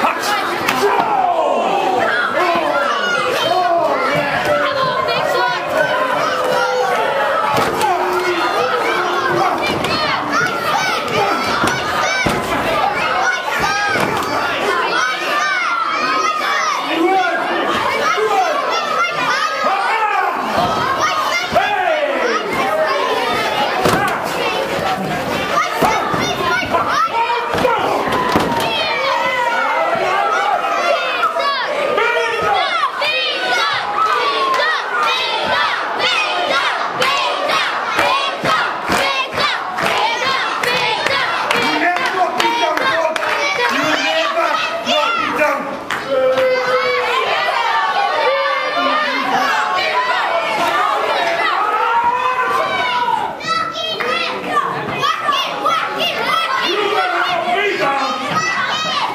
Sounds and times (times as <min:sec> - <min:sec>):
Speech: 0:00.0 - 0:59.1.